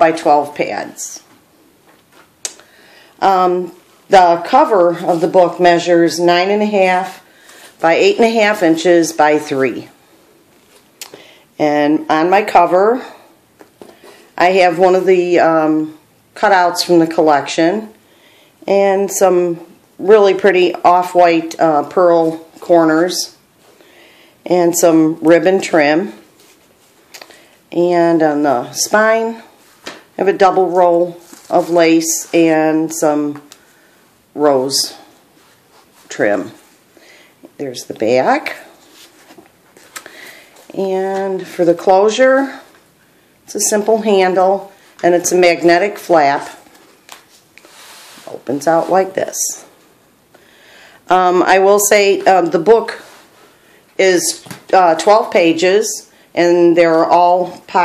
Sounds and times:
Speech: 0:00.0 - 0:01.3, 0:03.2 - 0:07.2, 0:07.8 - 0:10.0, 0:11.6 - 0:13.3, 0:14.4 - 0:18.0, 0:18.7 - 0:23.4, 0:24.5 - 0:26.2, 0:27.7 - 0:29.5, 0:30.2 - 0:33.5, 0:34.4 - 0:35.1, 0:36.1 - 0:36.6, 0:37.6 - 0:38.7, 0:40.7 - 0:42.7, 0:43.5 - 0:46.6, 0:48.3 - 0:49.7, 0:51.1 - 0:53.1, 0:54.0 - 0:57.8.

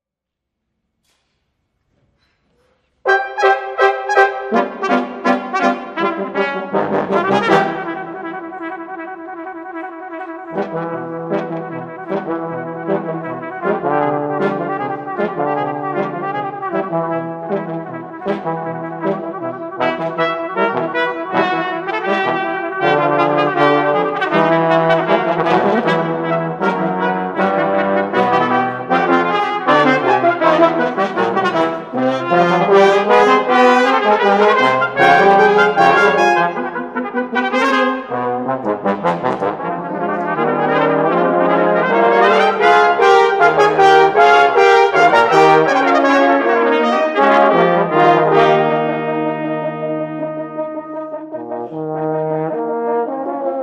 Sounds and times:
Trombone: 0:03.0 - 0:53.6.

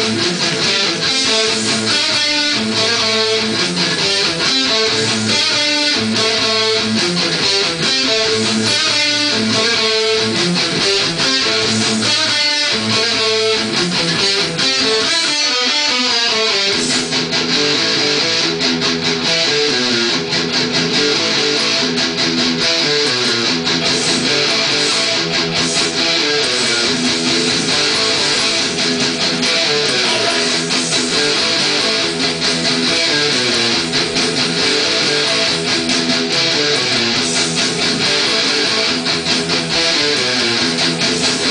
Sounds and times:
Bass guitar: 0:00.0 - 0:41.5.

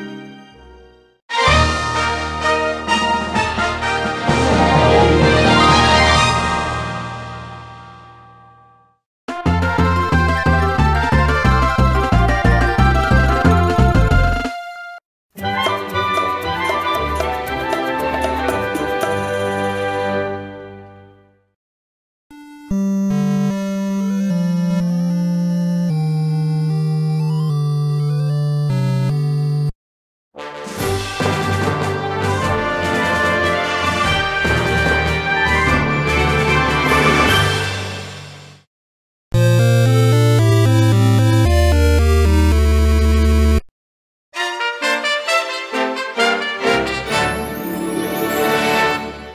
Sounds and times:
Music: 0:00.0 - 0:21.6, 0:22.3 - 0:29.7, 0:30.4 - 0:38.7, 0:39.4 - 0:43.7, 0:44.4 - 0:49.3.

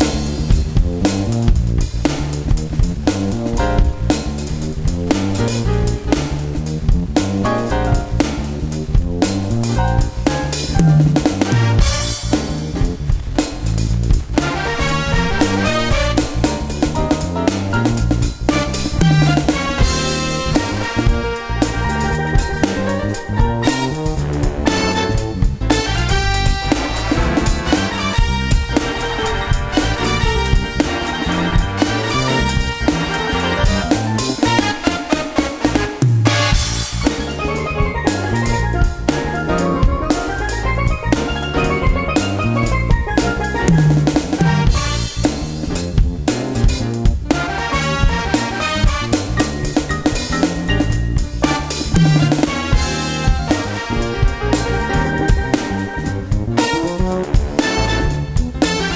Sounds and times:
Music: 0:00.0 - 0:58.9.

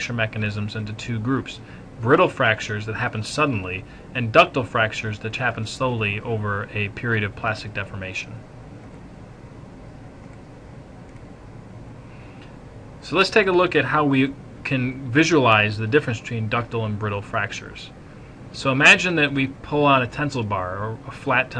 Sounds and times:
Speech: 0:00.0 - 0:08.4, 0:13.0 - 0:21.5.

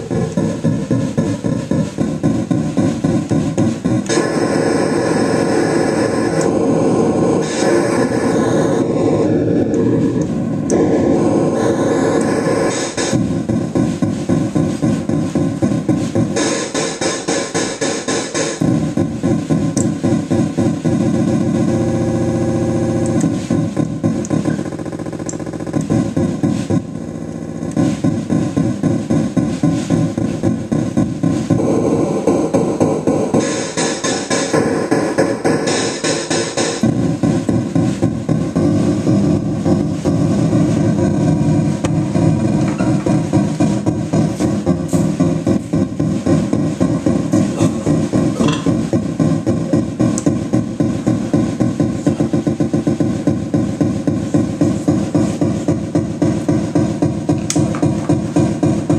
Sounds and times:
Electronic music: 0:00.0 - 0:58.9
Synthesizer: 0:00.0 - 0:58.9.

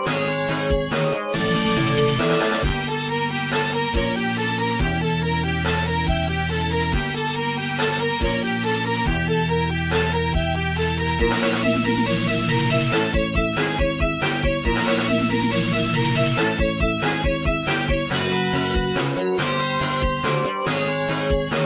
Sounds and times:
Music: 0:00.0 - 0:21.6.

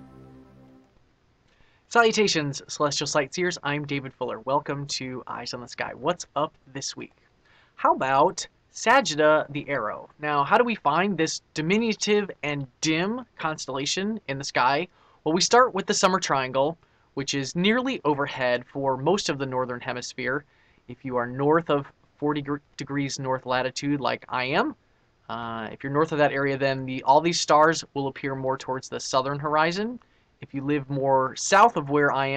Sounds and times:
Speech: 0:01.9 - 0:07.1, 0:07.8 - 0:32.3.

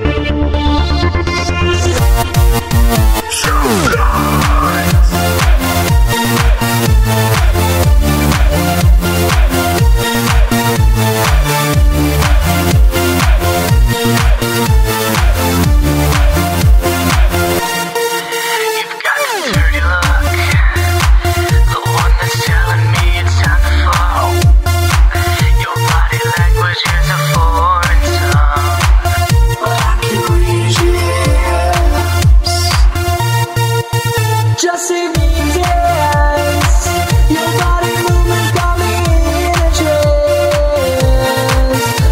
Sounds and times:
Electronic music: 0:00.0 - 0:42.1.

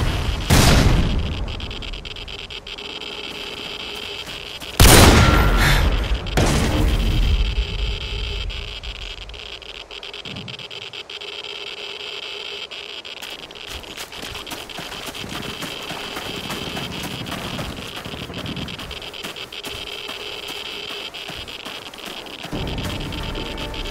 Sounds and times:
Outside, rural or natural: 0:00.0 - 0:23.9.

